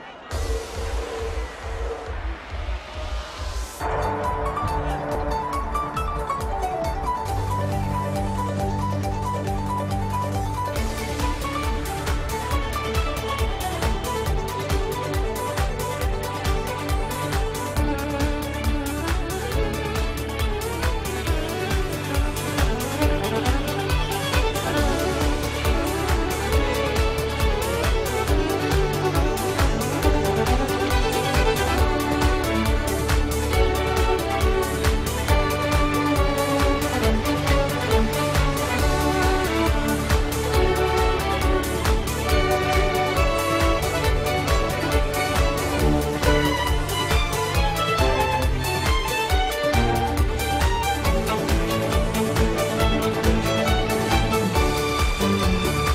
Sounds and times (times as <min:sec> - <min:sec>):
Music: 0:00.0 - 0:55.9.